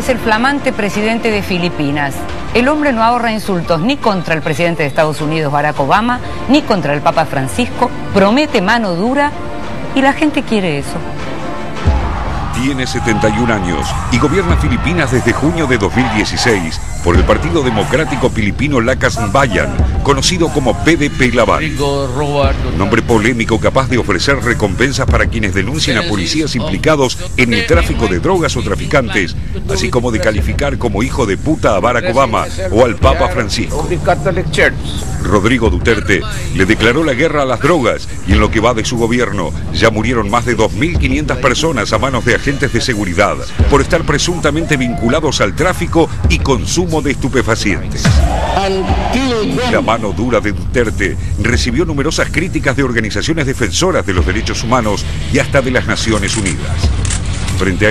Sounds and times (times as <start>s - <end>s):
Music: 0.0s - 57.9s
Speech: 12.6s - 56.9s.